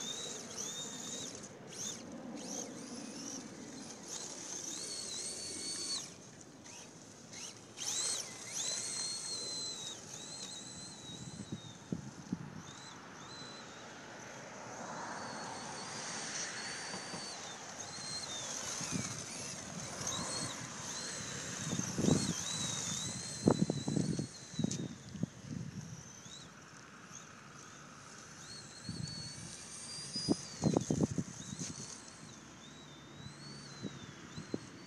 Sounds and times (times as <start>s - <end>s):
Car: 0.0s - 34.8s.